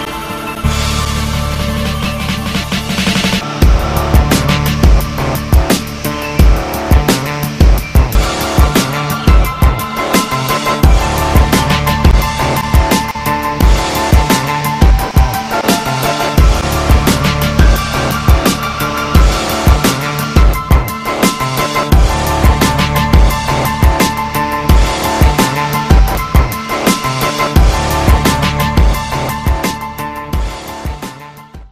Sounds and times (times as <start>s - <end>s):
Music: 0.0s - 31.7s.